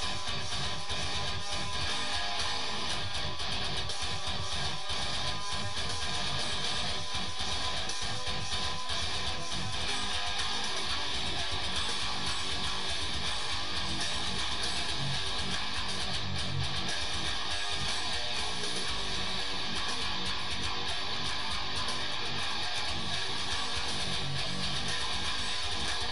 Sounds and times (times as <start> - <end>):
Bass guitar: 0.0 - 26.1.